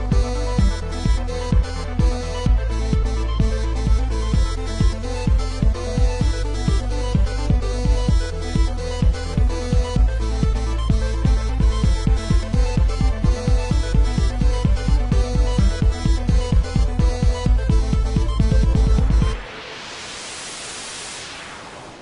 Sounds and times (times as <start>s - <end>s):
Music: 0.0s - 22.0s.